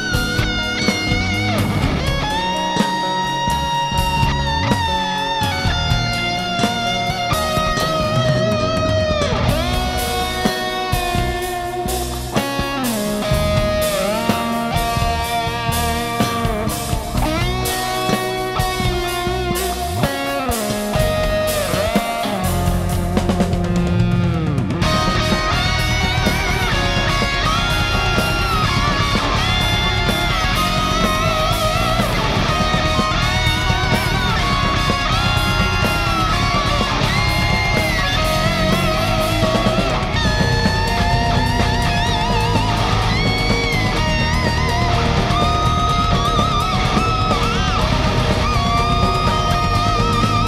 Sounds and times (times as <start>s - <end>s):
Electric guitar: 0.0s - 50.4s
Heavy metal: 0.0s - 50.4s.